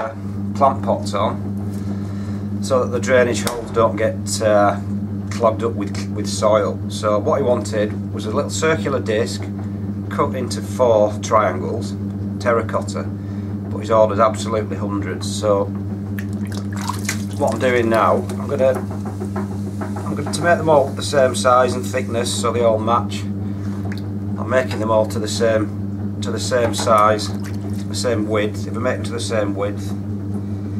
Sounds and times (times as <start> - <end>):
Speech: 0.0 - 1.4, 2.6 - 13.1, 13.7 - 15.8, 17.4 - 18.8, 20.1 - 23.3, 24.4 - 30.0.